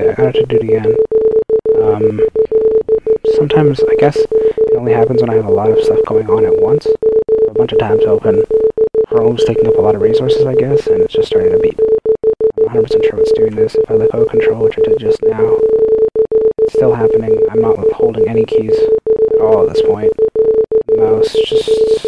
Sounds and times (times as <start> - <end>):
Speech: 0.0 - 1.0, 1.8 - 2.3, 3.3 - 8.5, 9.1 - 11.8, 12.6 - 15.6, 16.7 - 20.1, 21.0 - 22.0.